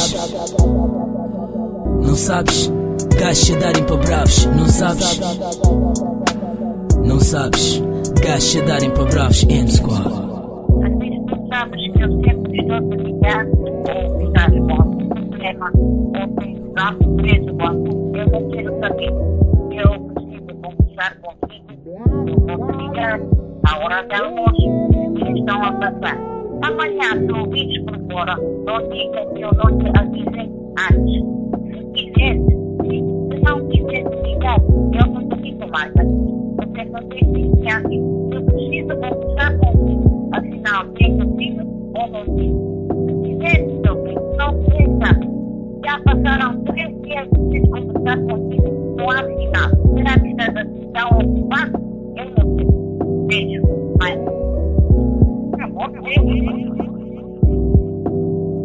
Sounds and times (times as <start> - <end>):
Speech: 0.0 - 0.4, 2.0 - 5.5, 7.0 - 42.5, 43.3 - 52.7, 53.3 - 54.5, 55.6 - 57.4
Music: 0.0 - 58.6.